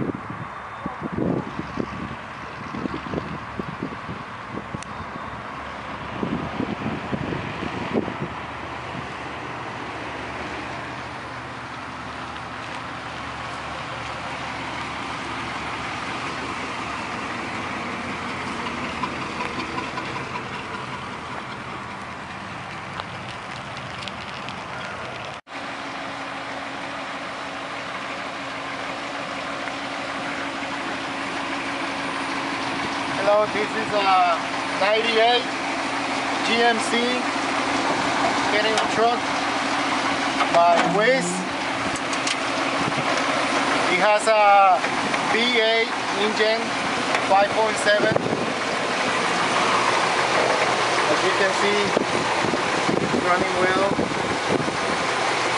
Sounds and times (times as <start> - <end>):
Truck: 0.0 - 55.5
Speech: 33.2 - 35.5, 36.4 - 37.3, 38.5 - 39.2, 40.5 - 41.5, 43.9 - 46.7, 47.3 - 48.3, 51.1 - 52.0, 53.2 - 54.0.